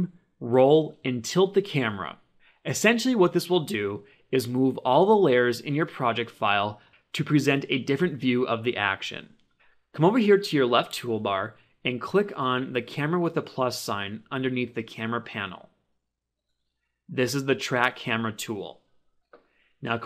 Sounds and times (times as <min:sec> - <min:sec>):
Speech: 0:00.0 - 0:09.4, 0:10.0 - 0:15.7, 0:17.1 - 0:18.8, 0:19.8 - 0:20.0.